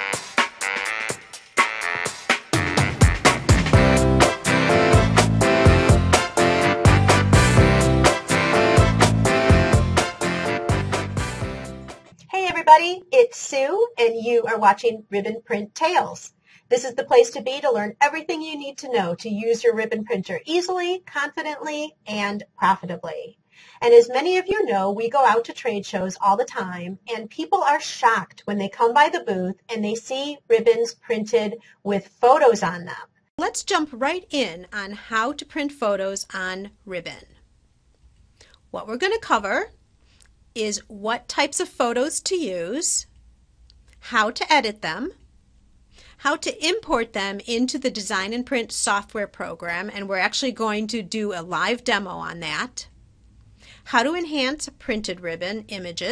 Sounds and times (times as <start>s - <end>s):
Speech: 12.3s - 37.3s, 38.7s - 39.7s, 40.6s - 43.1s, 44.0s - 45.2s, 46.2s - 52.9s, 53.9s - 56.1s.